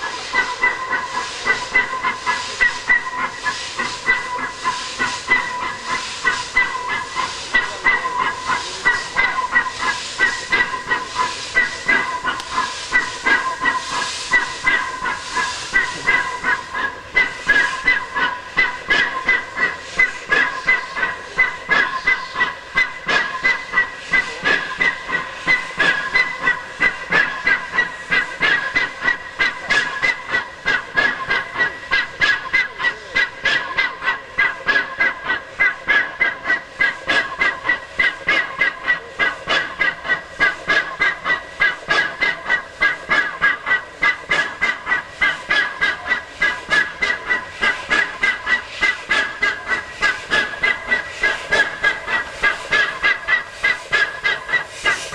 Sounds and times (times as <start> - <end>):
Hiss: 0.0 - 55.1.